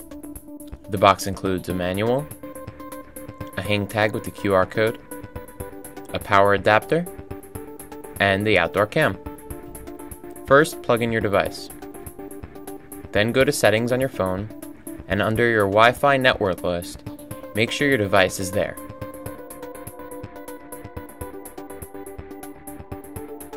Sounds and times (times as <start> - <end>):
Music: 0.0 - 23.5
Speech: 0.9 - 2.3, 3.6 - 5.0, 6.1 - 7.1, 8.2 - 9.2, 10.5 - 11.7, 13.2 - 14.5, 15.1 - 17.0, 17.6 - 18.8.